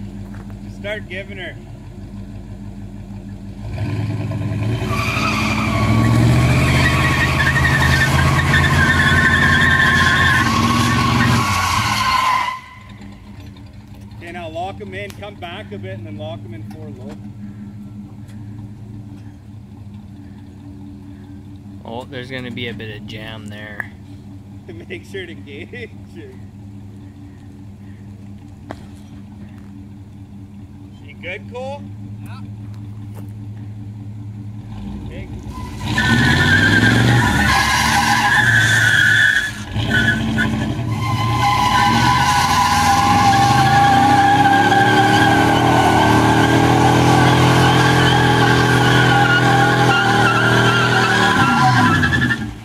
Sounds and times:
Skidding: 0.0 - 52.6.

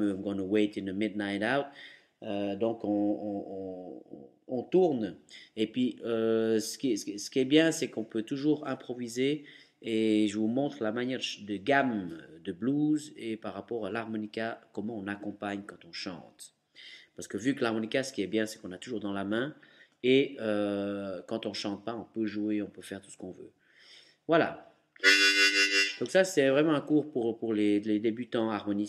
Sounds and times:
Speech: 0.0 - 16.6, 17.2 - 23.5, 24.3 - 24.7, 26.0 - 28.8.

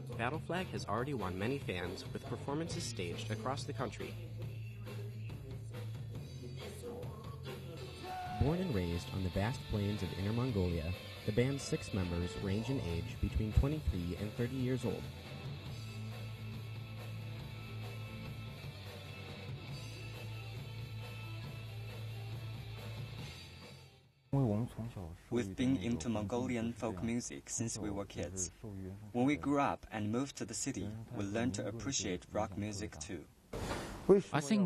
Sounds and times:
Speech: 0.0 - 4.2, 8.4 - 15.1, 24.4 - 33.3, 34.1 - 34.6.

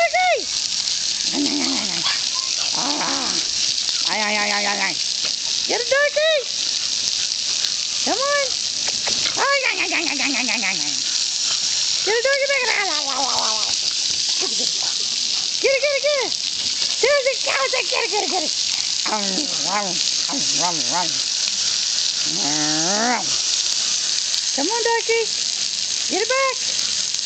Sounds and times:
Gurgling: 0.8 - 5.6, 6.9 - 23.8
Speech: 4.0 - 5.0, 5.7 - 6.5, 8.0 - 8.6, 9.4 - 11.0, 12.0 - 13.7, 14.4 - 16.4, 17.0 - 21.2, 22.3 - 23.4, 24.6 - 25.4, 26.1 - 26.7.

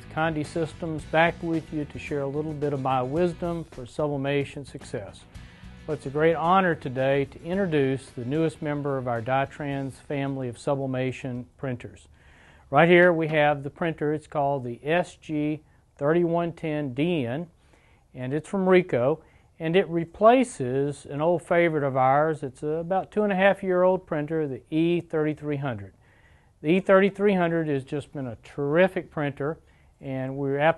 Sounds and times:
Speech: 0.0 - 5.2, 5.9 - 12.1, 12.7 - 17.5, 18.2 - 26.0, 26.6 - 30.7.

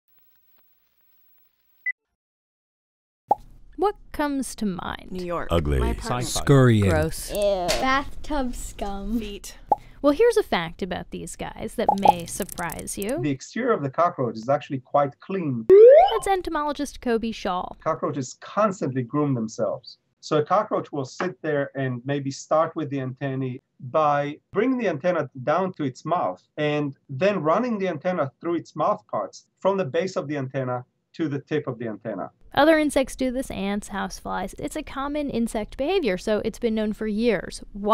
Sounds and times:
Speech: 3.8 - 8.1, 9.0 - 37.9.

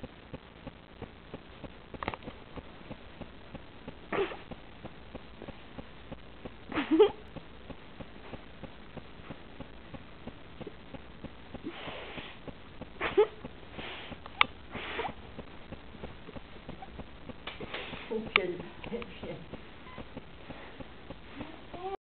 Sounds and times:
Speech: 18.1 - 19.5.

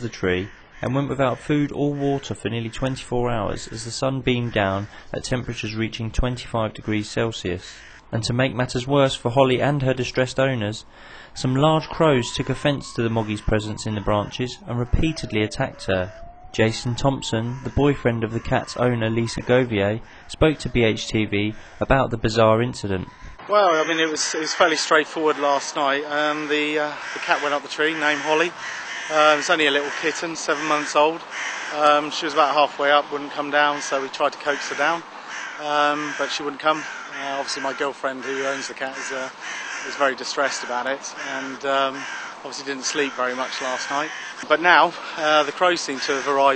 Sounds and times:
Speech: 0.0 - 39.3, 39.9 - 46.5
Animal: 11.8 - 21.7, 33.3 - 44.6.

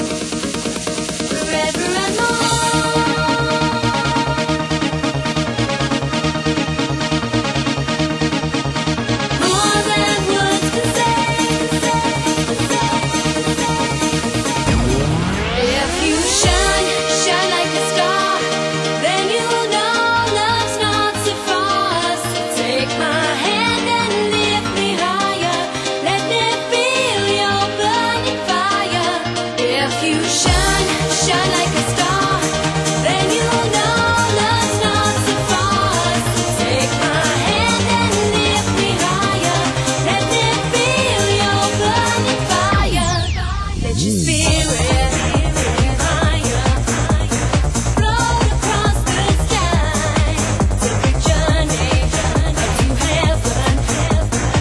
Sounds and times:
Exciting music: 0.0 - 54.6.

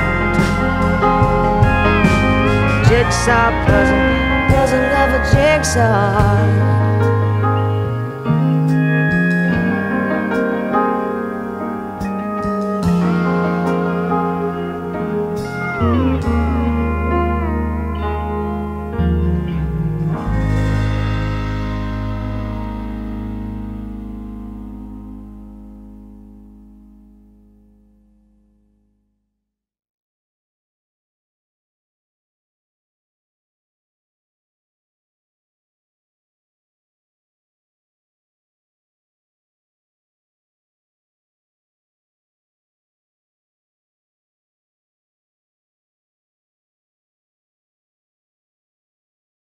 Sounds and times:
Electric piano: 0.0 - 28.4.

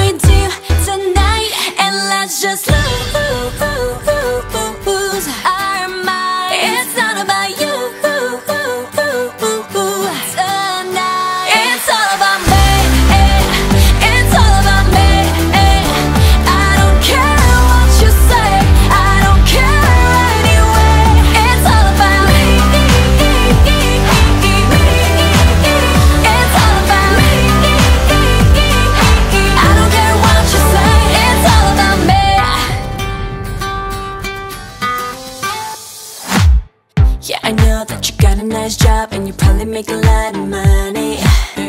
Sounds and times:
Singing: 0.0 - 32.9, 37.3 - 41.6
Music: 0.0 - 41.6.

